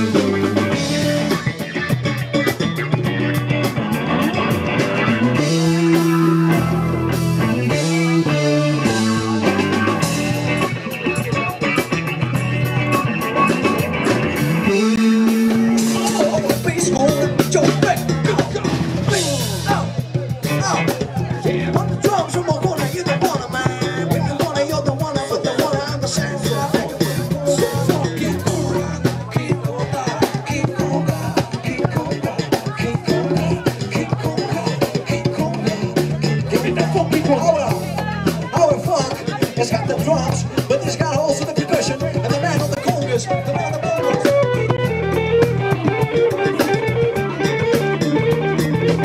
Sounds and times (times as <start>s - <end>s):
Drum: 0.0s - 49.0s
Drum kit: 0.0s - 49.0s
Speech: 0.0s - 49.0s
Singing: 14.6s - 49.0s.